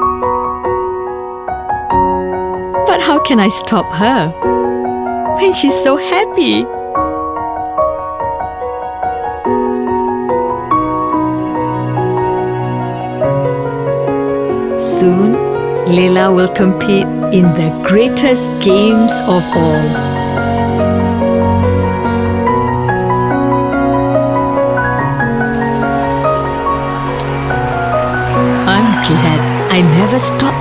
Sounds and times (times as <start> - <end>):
Music: 0.0 - 30.6
Speech: 2.9 - 4.4, 5.4 - 6.7, 14.8 - 20.0, 28.7 - 30.6.